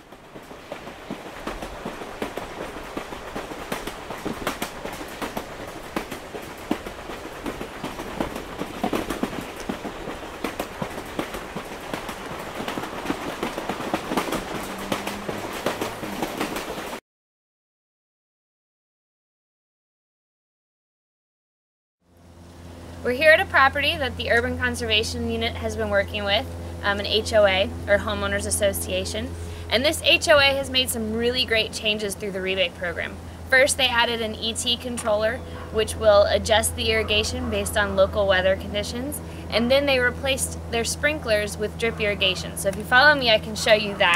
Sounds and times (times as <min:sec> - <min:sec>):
Speech: 0:23.0 - 0:44.1.